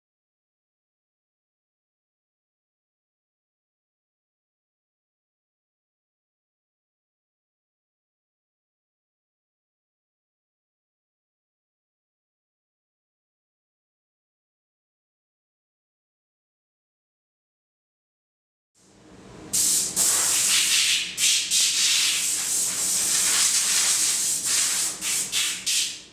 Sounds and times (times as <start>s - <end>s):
Rub: 20.0s - 25.9s.